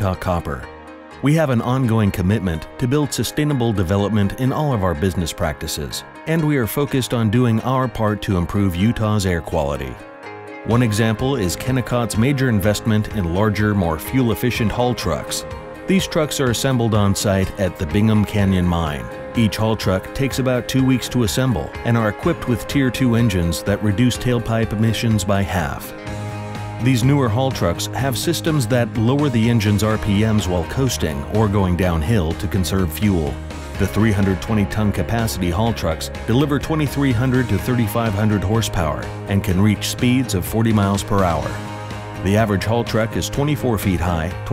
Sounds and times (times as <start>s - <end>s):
Speech: 0.0s - 10.0s, 10.6s - 25.9s, 26.8s - 41.6s, 42.2s - 44.5s
Music: 0.0s - 44.5s.